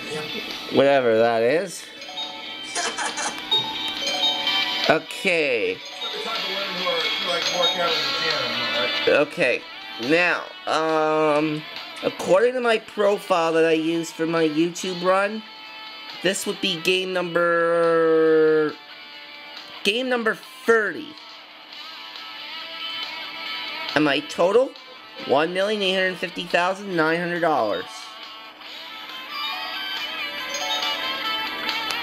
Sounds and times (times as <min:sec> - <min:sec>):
Music: 0:00.0 - 0:32.0
Speech: 0:04.9 - 0:15.4, 0:16.2 - 0:18.8.